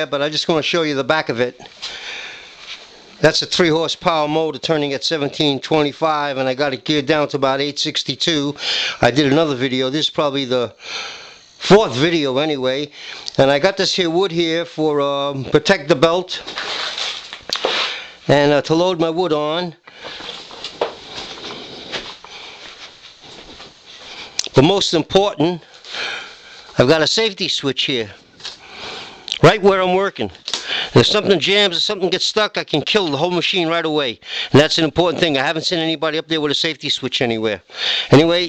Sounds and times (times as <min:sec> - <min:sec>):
Speech: 0:00.0 - 0:01.6, 0:03.2 - 0:10.8, 0:11.6 - 0:16.5, 0:18.3 - 0:19.8, 0:24.4 - 0:25.7, 0:26.8 - 0:28.2, 0:29.3 - 0:30.4, 0:31.0 - 0:38.4.